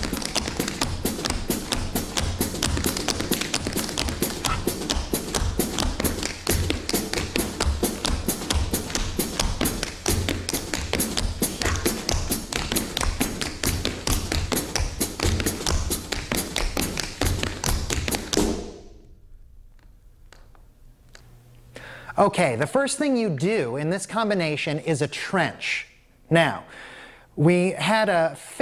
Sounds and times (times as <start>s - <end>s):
Music: 0.0s - 19.0s.